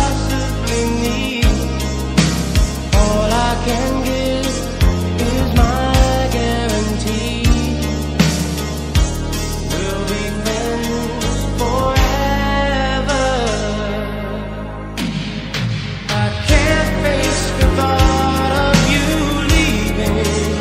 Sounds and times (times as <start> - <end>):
Soul music: 0.0 - 20.6.